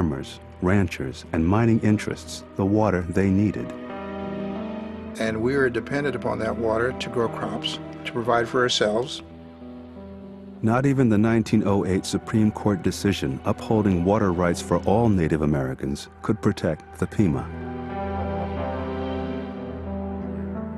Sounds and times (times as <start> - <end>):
Speech: 0.0 - 3.8, 5.2 - 9.2, 10.6 - 17.5
Music: 0.0 - 20.7.